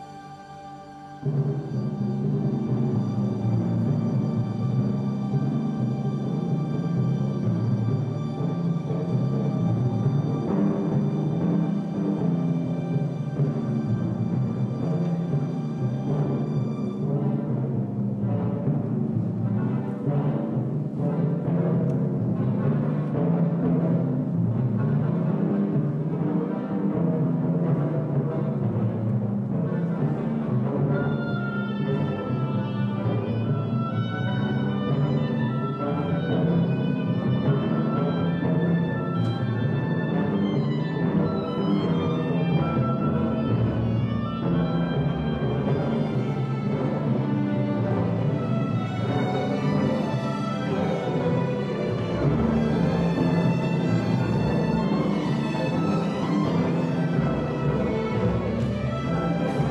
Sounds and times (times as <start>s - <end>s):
Classical music: 0.0s - 59.7s
Orchestra: 0.0s - 59.7s
Timpani: 0.0s - 59.7s.